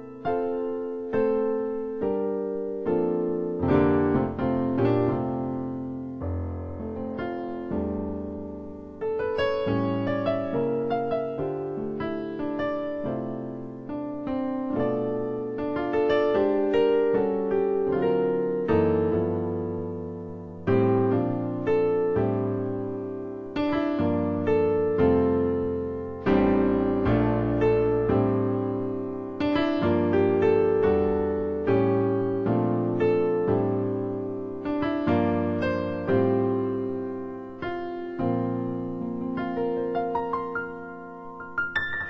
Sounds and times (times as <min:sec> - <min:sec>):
Electric piano: 0:00.0 - 0:42.1.